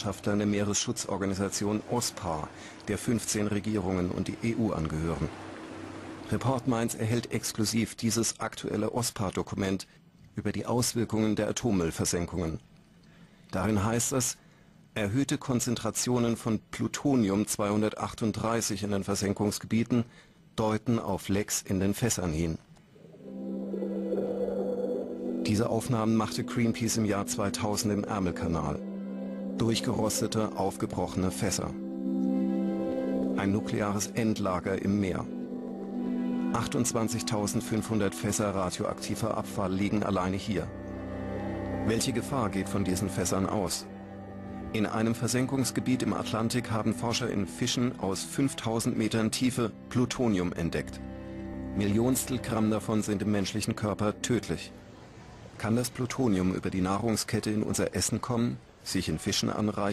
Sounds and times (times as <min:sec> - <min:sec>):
Speech: 0:00.0 - 0:05.3, 0:06.3 - 0:12.6, 0:13.5 - 0:14.4, 0:15.0 - 0:22.6, 0:25.5 - 0:28.8, 0:29.6 - 0:31.8, 0:33.3 - 0:35.3, 0:36.6 - 0:40.7, 0:41.9 - 0:43.8, 0:44.8 - 0:51.0, 0:51.8 - 0:54.7, 0:55.6 - 0:59.9
Music: 0:23.0 - 0:55.1.